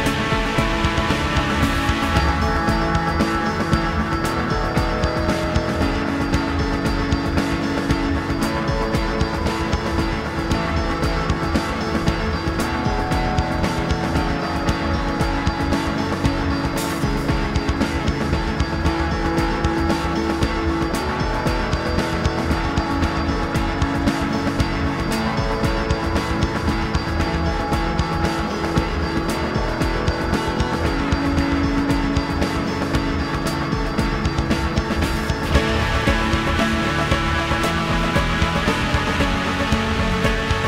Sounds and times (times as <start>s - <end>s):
Music: 0.0s - 40.6s.